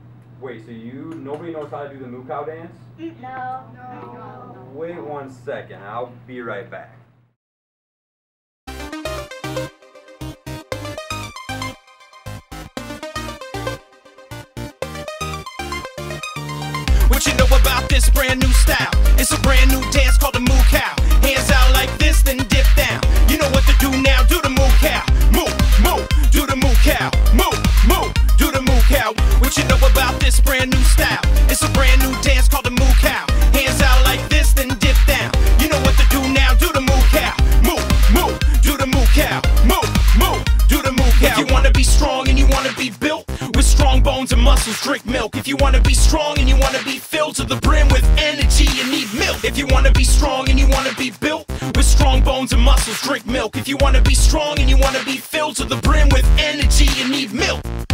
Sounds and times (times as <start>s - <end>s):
Music: 8.7s - 57.9s.